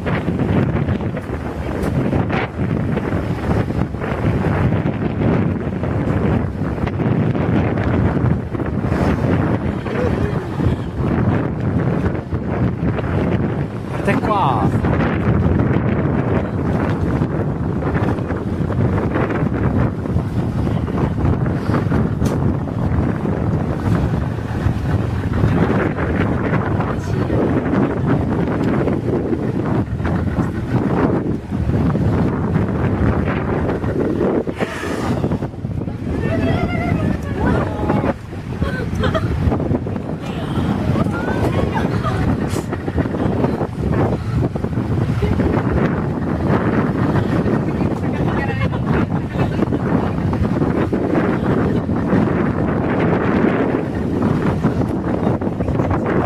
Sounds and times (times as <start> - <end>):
Ocean: 0.0 - 56.2.